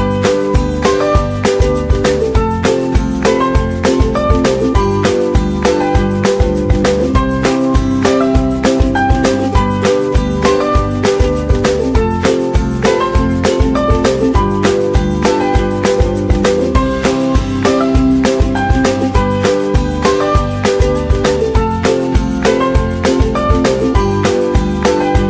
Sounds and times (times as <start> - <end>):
Music: 0.0 - 25.3.